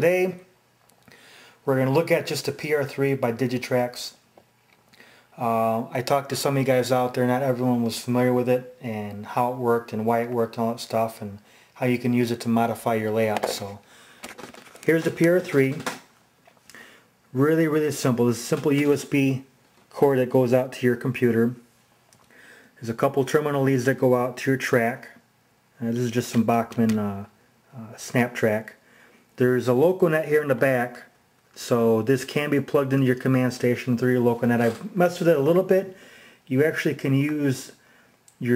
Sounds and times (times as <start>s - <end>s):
Speech: 0.0s - 0.5s, 1.6s - 4.2s, 5.4s - 13.9s, 14.8s - 16.0s, 17.3s - 21.7s, 22.8s - 25.2s, 25.8s - 28.8s, 29.4s - 37.8s.